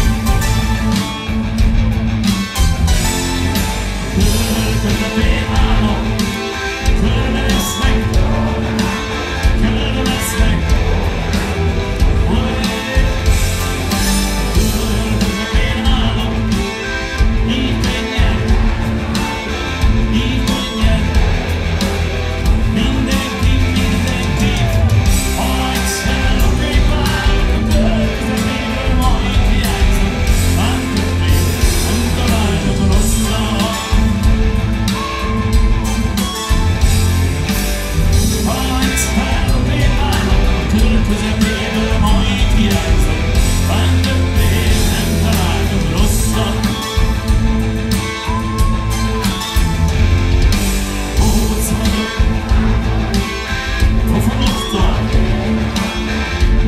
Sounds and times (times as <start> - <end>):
Soul music: 0.0 - 56.6.